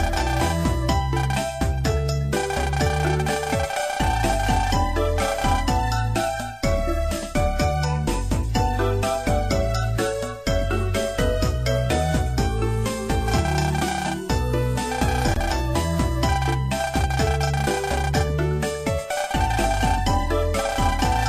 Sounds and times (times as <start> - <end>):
Music: 0.0 - 21.2.